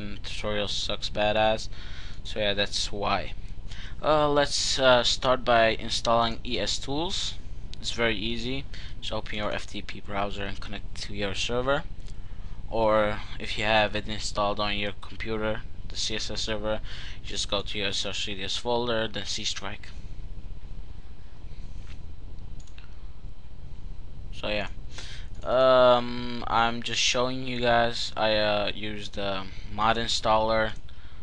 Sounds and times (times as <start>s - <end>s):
Speech: 0.0s - 3.4s, 4.0s - 11.9s, 12.7s - 20.0s, 24.4s - 24.8s, 25.4s - 30.8s.